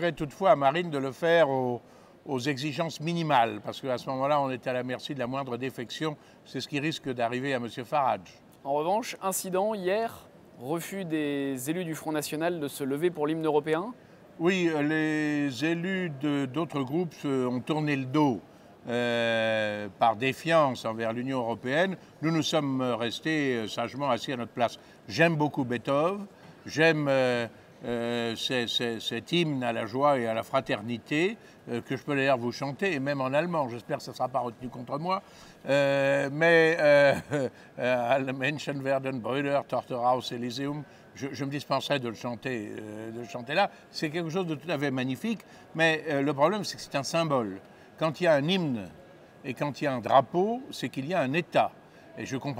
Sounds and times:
Speech: 0.0 - 52.5.

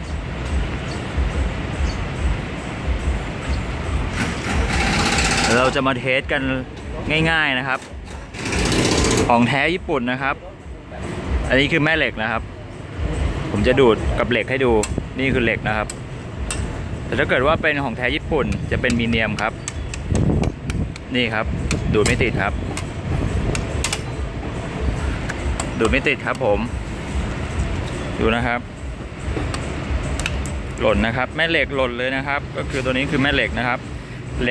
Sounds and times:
Speech: 5.5 - 7.9, 9.3 - 12.5, 13.5 - 15.9, 17.1 - 19.6, 21.1 - 22.6, 25.8 - 26.8, 28.2 - 28.6, 30.8 - 33.8.

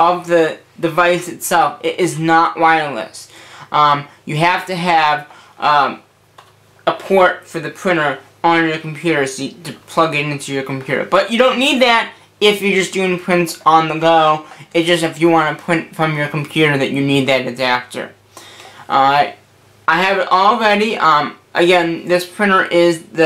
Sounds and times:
Speech: 0.0 - 6.1, 6.9 - 18.2, 18.8 - 23.2.

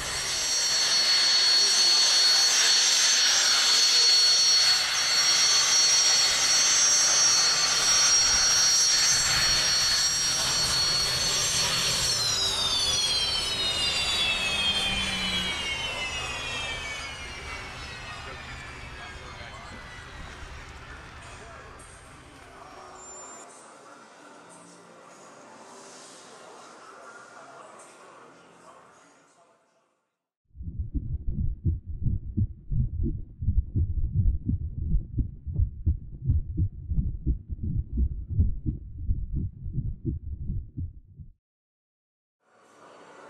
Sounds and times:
Jet engine: 0.0 - 23.5.

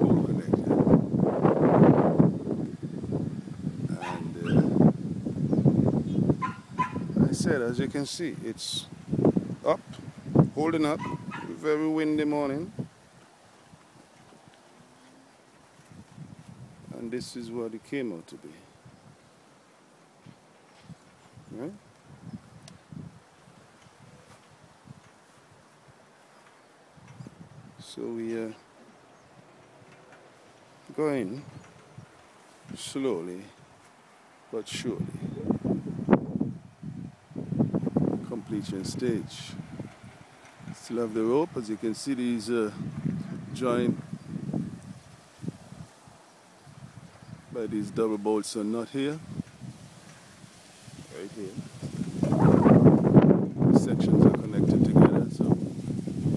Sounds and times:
Speech: 0.0 - 0.8, 3.9 - 4.8, 7.2 - 8.9, 9.6 - 9.8, 10.5 - 12.8, 16.9 - 18.7, 21.5 - 21.8, 27.8 - 28.7, 30.9 - 31.5, 32.7 - 33.6, 34.5 - 35.5, 38.2 - 39.6, 40.8 - 42.8, 43.5 - 44.0, 47.5 - 49.3, 51.1 - 51.6, 53.7 - 55.6
Wind: 0.0 - 56.3.

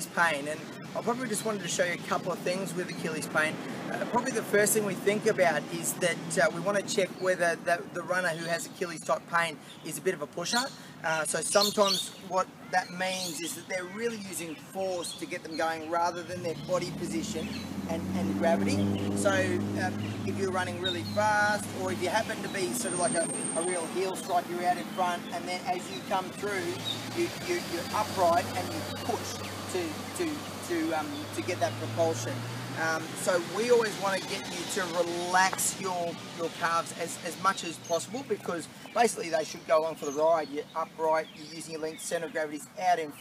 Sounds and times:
Outside, urban or manmade: 0.0 - 43.2
Speech: 0.0 - 43.2.

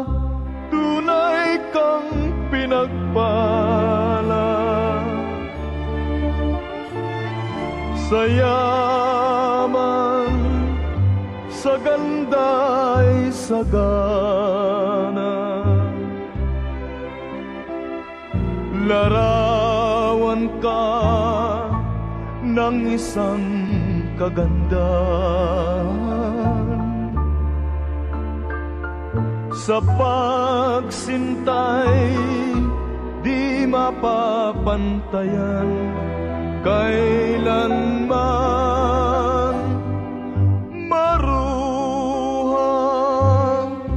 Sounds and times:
Music: 0.0 - 43.9.

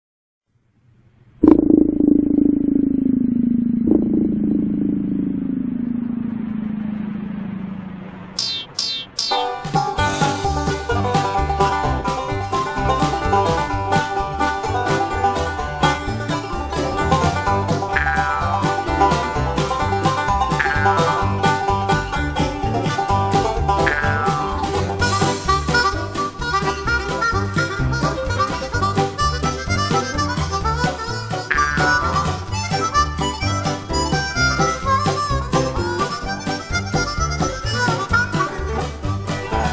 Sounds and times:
Music: 9.2 - 39.7.

